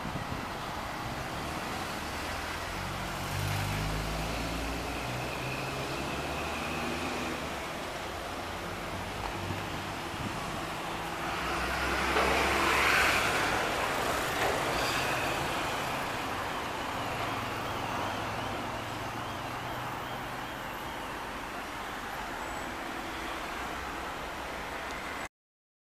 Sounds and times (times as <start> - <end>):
Car: 0.0 - 25.3.